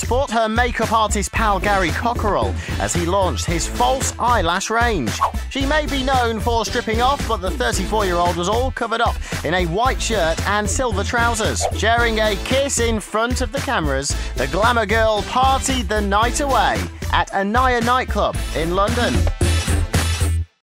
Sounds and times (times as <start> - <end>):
Speech: 0.0 - 19.2
Music: 0.0 - 20.6.